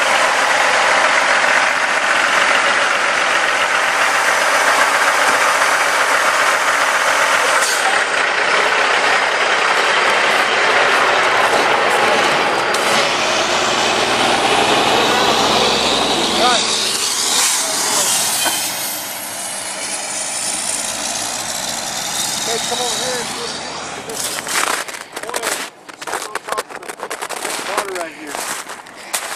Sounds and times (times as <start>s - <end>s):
Speech: 16.4s - 16.7s, 17.3s - 18.2s, 22.5s - 24.3s, 26.2s - 28.4s.